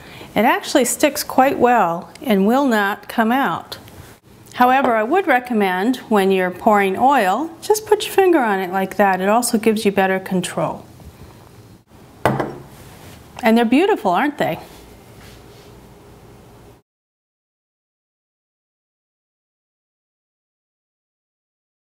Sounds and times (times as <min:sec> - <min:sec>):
Speech: 0:00.4 - 0:03.8, 0:04.6 - 0:10.8, 0:13.4 - 0:14.7.